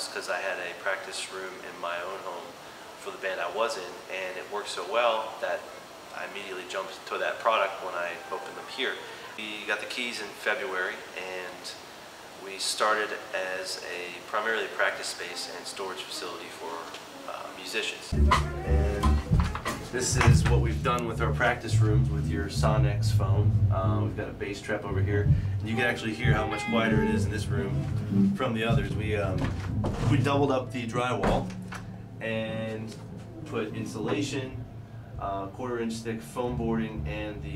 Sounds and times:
Speech: 0:00.0 - 0:11.8, 0:12.4 - 0:19.2, 0:19.9 - 0:31.5, 0:32.2 - 0:34.6, 0:35.2 - 0:37.5
Music: 0:18.1 - 0:37.5.

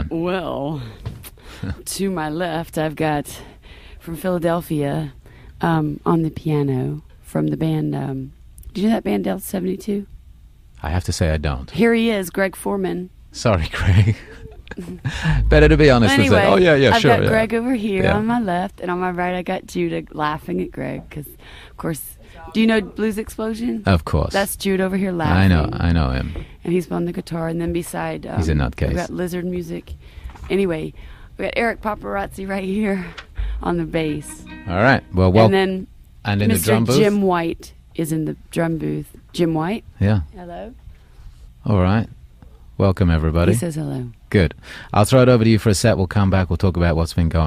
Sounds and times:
Speech: 0:12.6 - 0:14.2, 0:15.2 - 0:29.8, 0:30.5 - 0:40.6, 0:41.7 - 0:42.1, 0:42.8 - 0:47.4.

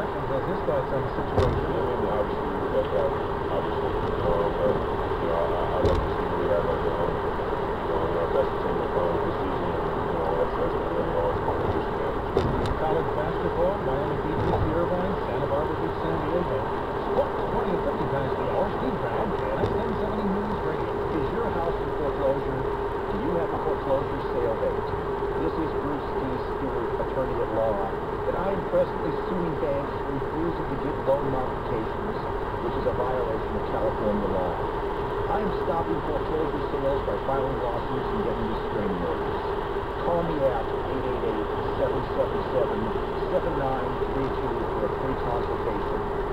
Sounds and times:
Speech: 0:00.0 - 0:07.2, 0:07.9 - 0:34.7, 0:35.3 - 0:39.3, 0:40.0 - 0:46.1
Car: 0:00.0 - 0:46.3.

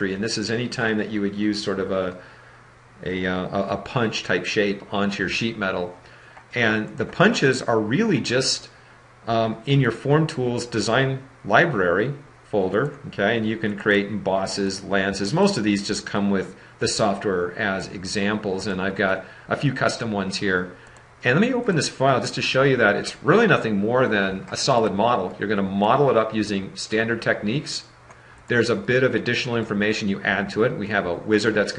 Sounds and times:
Speech: 0:00.0 - 0:02.2, 0:03.0 - 0:27.9, 0:28.5 - 0:31.7.

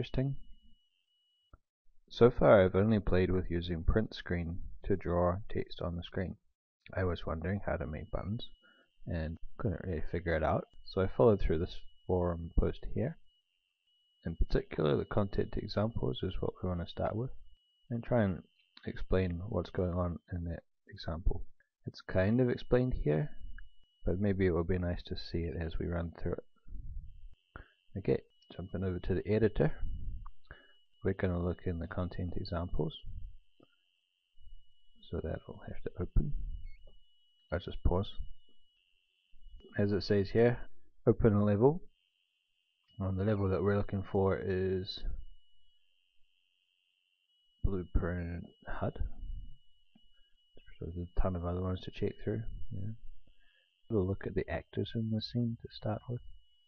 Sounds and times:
Speech: 0:00.0 - 0:00.5, 0:02.1 - 0:13.2, 0:14.2 - 0:23.4, 0:24.0 - 0:26.5, 0:27.9 - 0:29.9, 0:31.0 - 0:33.1, 0:35.0 - 0:36.4, 0:37.5 - 0:38.3, 0:39.7 - 0:41.9, 0:43.0 - 0:45.2, 0:47.6 - 0:49.2, 0:50.6 - 0:53.0, 0:53.9 - 0:56.3.

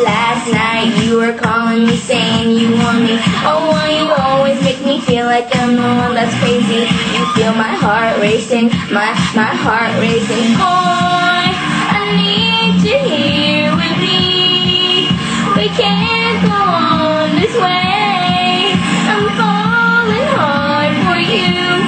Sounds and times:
Female singing: 0:00.0 - 0:21.8
Music: 0:00.0 - 0:21.8.

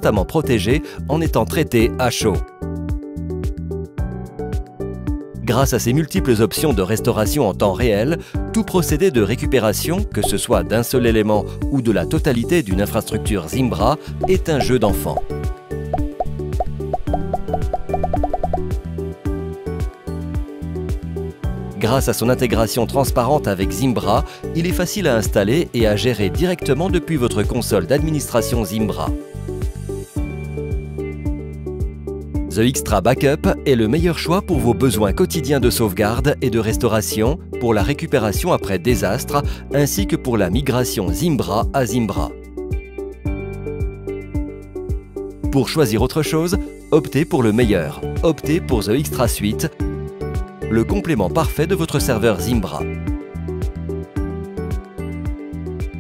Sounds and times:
Speech: 0:00.0 - 0:02.5, 0:05.4 - 0:15.3, 0:21.8 - 0:29.2, 0:32.5 - 0:42.4, 0:45.5 - 0:49.8, 0:50.7 - 0:52.9
Music: 0:00.0 - 0:56.0.

